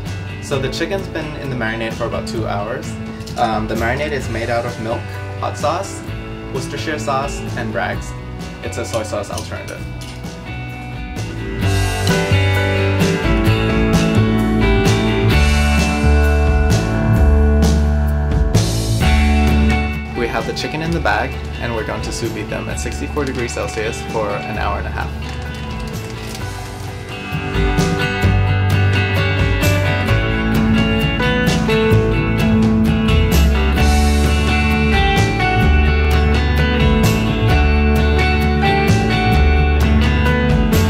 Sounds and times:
Music: 0.0s - 40.9s
Speech: 0.4s - 9.9s, 20.2s - 25.2s.

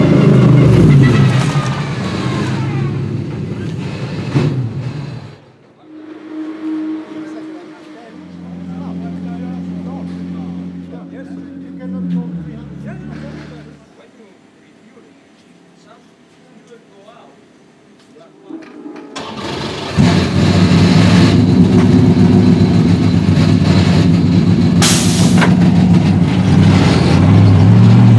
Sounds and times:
Race car, auto racing: 0.0s - 13.9s, 19.2s - 28.1s
Outside, urban or manmade: 0.0s - 28.1s.

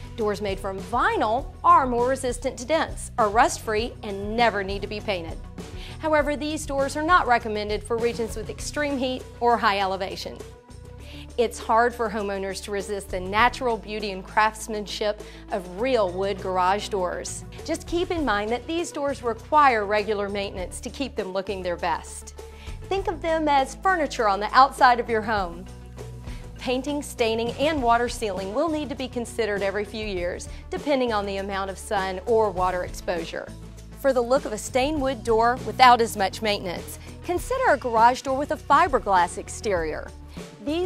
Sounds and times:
Music: 0.0s - 40.8s
Speech: 0.2s - 5.4s, 6.0s - 10.4s, 11.4s - 22.3s, 22.9s - 25.6s, 26.6s - 40.8s.

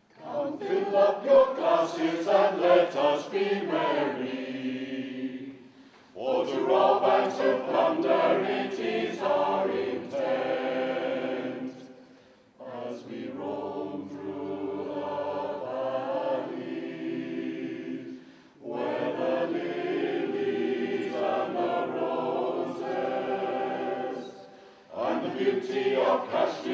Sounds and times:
Choir: 0.0s - 26.7s.

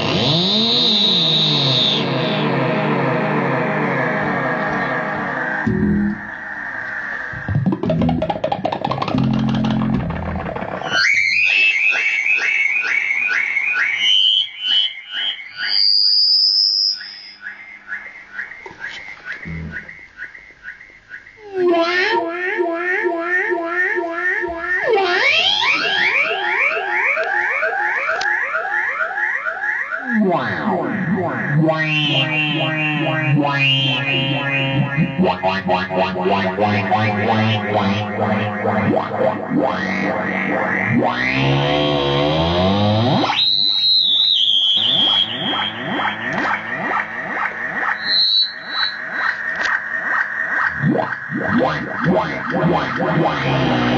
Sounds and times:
Electronic music: 0.0s - 17.4s, 21.4s - 28.9s, 30.0s - 53.9s
Theremin: 0.0s - 53.9s.

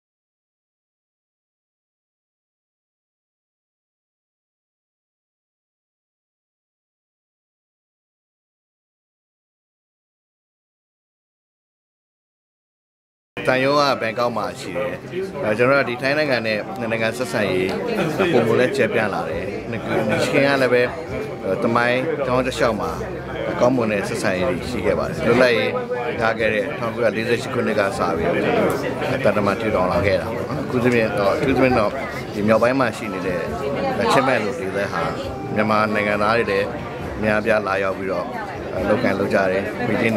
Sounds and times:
Male speech, man speaking: 13.4s - 40.1s.

